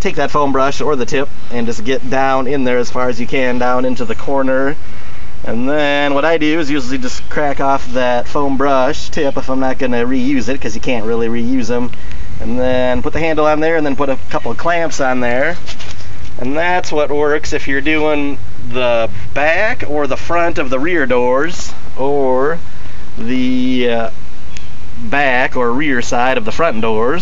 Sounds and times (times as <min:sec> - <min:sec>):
Speech: 0:00.0 - 0:04.8, 0:05.4 - 0:15.6, 0:16.4 - 0:22.6, 0:23.2 - 0:24.2, 0:25.0 - 0:27.2.